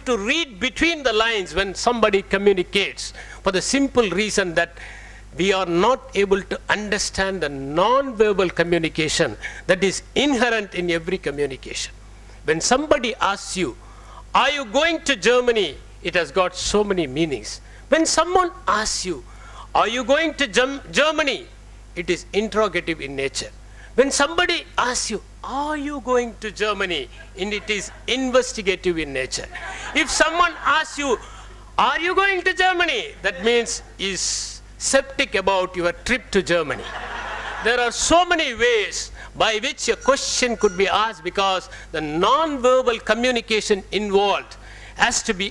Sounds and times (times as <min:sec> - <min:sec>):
Male speech, man speaking: 0:00.0 - 0:04.8, 0:05.4 - 0:11.9, 0:12.5 - 0:13.8, 0:14.4 - 0:19.2, 0:19.8 - 0:31.2, 0:31.8 - 0:36.9, 0:37.6 - 0:45.5
Narration, monologue: 0:00.0 - 0:45.5.